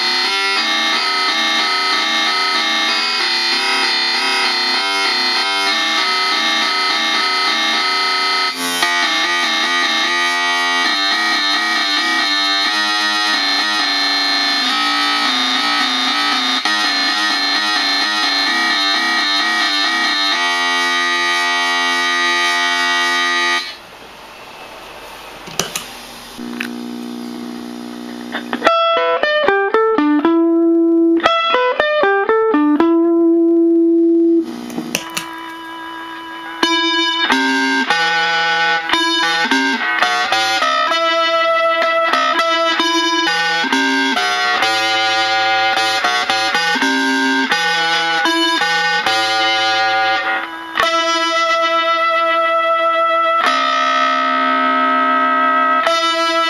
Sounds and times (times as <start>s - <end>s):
Effects unit: 0.0s - 23.8s, 26.3s - 56.5s
Music: 0.0s - 23.8s, 28.4s - 56.5s.